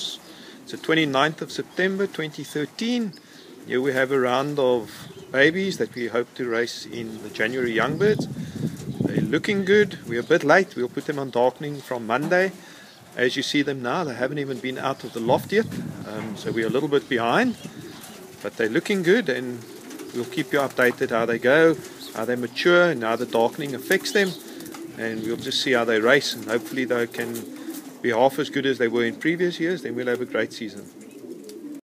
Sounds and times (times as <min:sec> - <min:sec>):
Speech: 0:00.0 - 0:08.3, 0:09.0 - 0:12.6, 0:13.2 - 0:17.7, 0:18.4 - 0:24.4, 0:25.0 - 0:30.9
Pigeon, dove: 0:00.0 - 0:31.8.